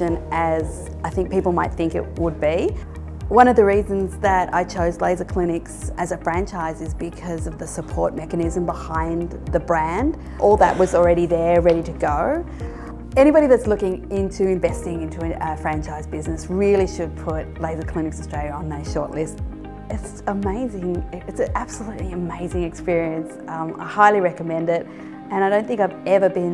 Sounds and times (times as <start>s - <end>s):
Speech: 0.0s - 12.4s, 13.2s - 26.5s
Music: 0.0s - 26.5s.